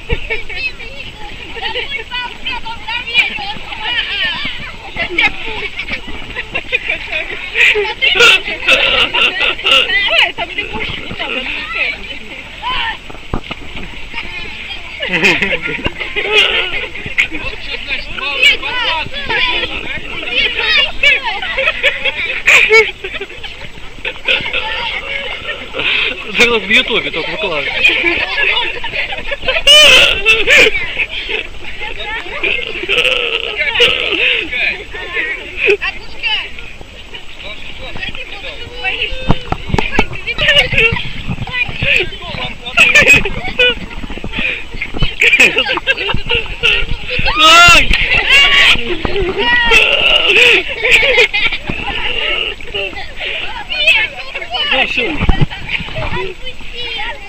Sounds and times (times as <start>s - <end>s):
Outside, rural or natural: 0.0s - 57.2s.